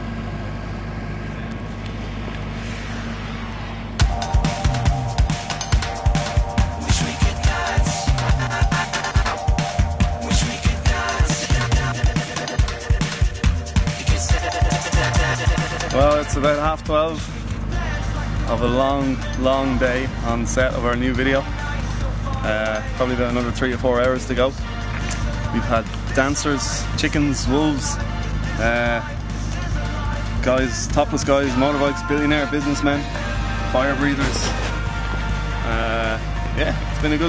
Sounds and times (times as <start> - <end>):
Music: 4.0 - 37.2
Speech: 16.0 - 17.2, 18.5 - 21.5, 22.4 - 24.6, 25.6 - 28.0, 30.4 - 33.0, 33.8 - 34.5, 35.7 - 37.2.